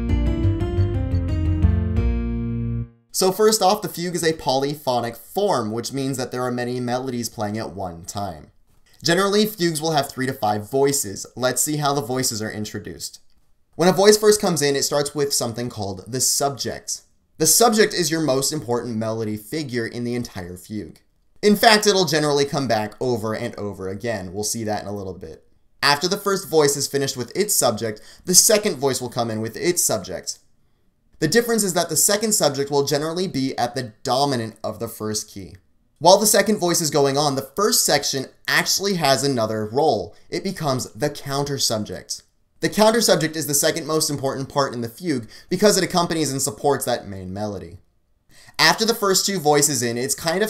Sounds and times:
Speech: 3.2 - 30.5, 31.2 - 47.9, 48.5 - 50.5.

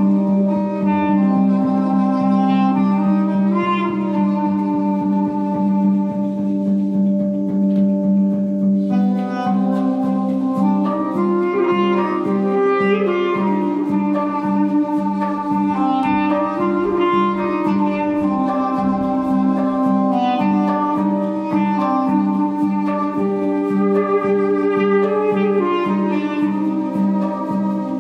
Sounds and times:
Clarinet: 0.0 - 28.0.

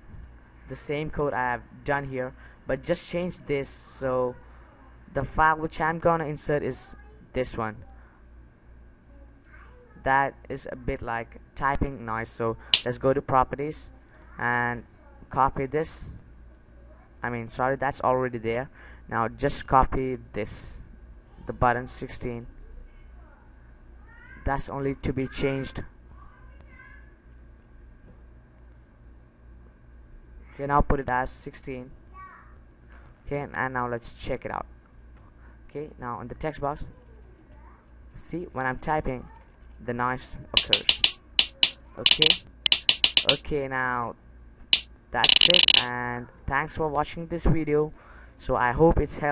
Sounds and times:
Speech: 0.7 - 4.4, 5.1 - 8.0, 9.3 - 16.2, 17.2 - 20.8, 24.4 - 25.8, 30.6 - 31.9, 39.9 - 43.4, 46.5 - 49.3.

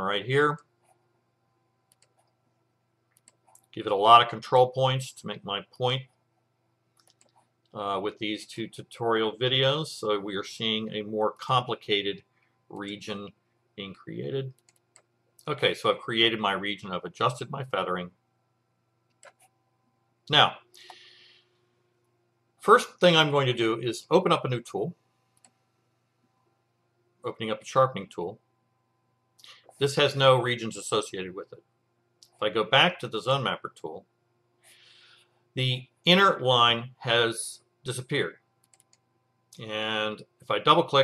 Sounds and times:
Speech: 0.0 - 0.6, 3.8 - 6.1, 7.8 - 14.5, 15.4 - 18.2, 20.3 - 20.6, 22.6 - 25.0, 27.3 - 28.4, 29.8 - 31.6, 32.3 - 34.0, 35.6 - 38.4, 39.6 - 41.0.

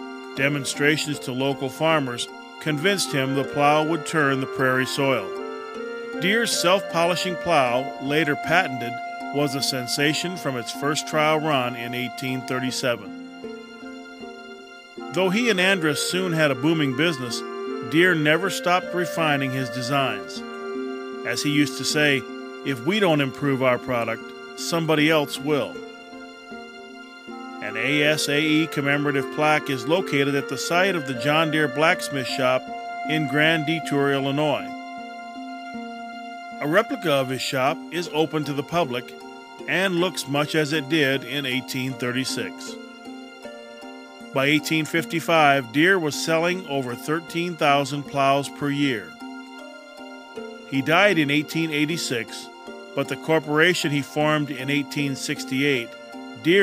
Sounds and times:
Music: 0.0 - 56.6
Speech: 0.4 - 5.3, 6.2 - 13.1, 15.1 - 20.4, 21.3 - 25.8, 27.6 - 34.7, 36.6 - 39.1, 39.7 - 42.8, 44.4 - 49.2, 50.7 - 56.6.

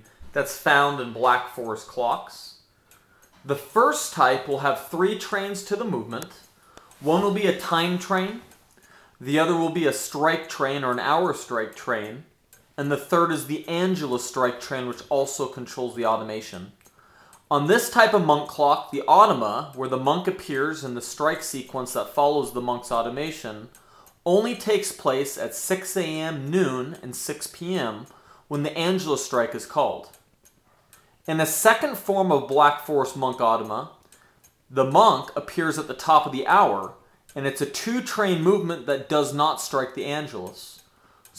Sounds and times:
Speech: 0.0 - 2.6, 3.4 - 8.5, 9.2 - 16.8, 17.5 - 30.2, 31.3 - 34.0, 34.7 - 41.3
Tick-tock: 0.0 - 41.3.

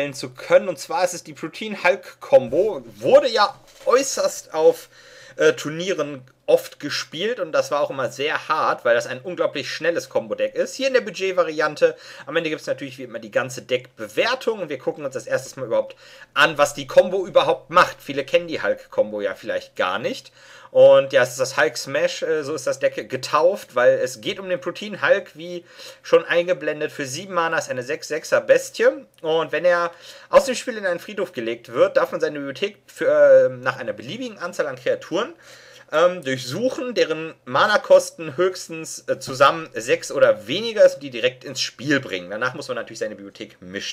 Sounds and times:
Speech: 0.0 - 43.9.

